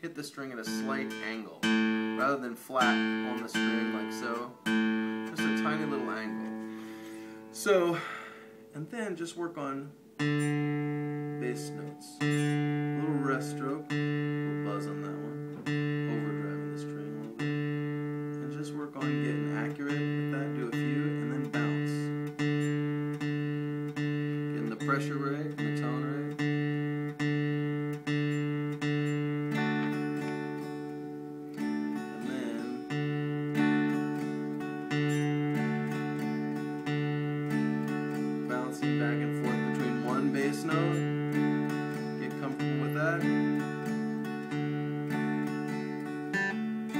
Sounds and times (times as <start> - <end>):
Speech: 0.0 - 4.6, 5.3 - 6.4, 7.6 - 8.0, 8.7 - 10.0, 11.4 - 13.9, 14.6 - 15.4, 16.0 - 17.4, 18.4 - 22.1, 24.5 - 26.4, 32.2 - 32.8, 38.5 - 41.0, 42.2 - 43.4
Music: 0.2 - 46.9.